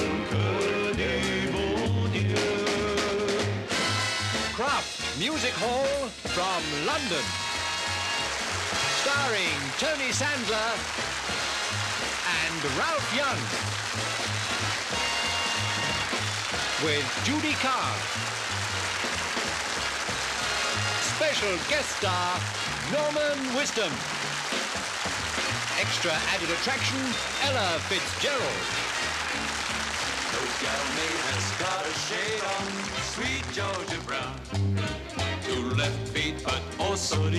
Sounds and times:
Music: 0.0s - 37.3s
Speech: 4.6s - 7.3s, 9.0s - 10.8s, 12.2s - 13.5s, 16.8s - 18.1s, 21.0s - 24.0s, 25.8s - 28.7s.

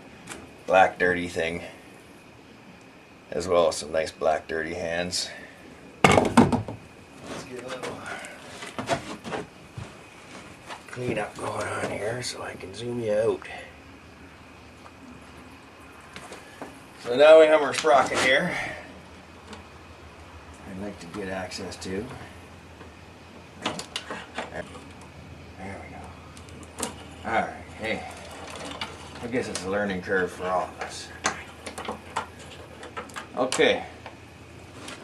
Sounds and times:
Speech: 3.3s - 5.4s, 7.4s - 8.3s, 10.9s - 13.7s, 17.0s - 18.8s, 20.6s - 22.3s, 29.2s - 31.2s, 33.4s - 34.0s.

